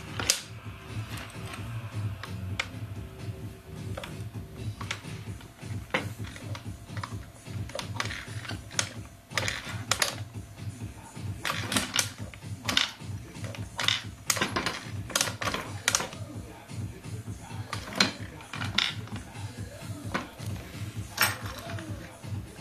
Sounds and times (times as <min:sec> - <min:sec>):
Music: 0:00.0 - 0:22.6.